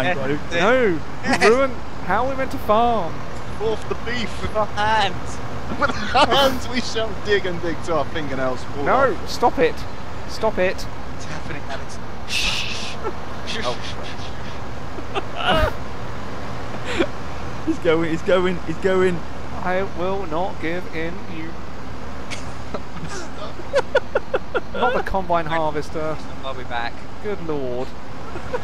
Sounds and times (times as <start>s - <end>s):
Speech: 0.0s - 12.6s, 13.5s - 14.2s, 17.7s - 21.6s, 24.8s - 27.9s.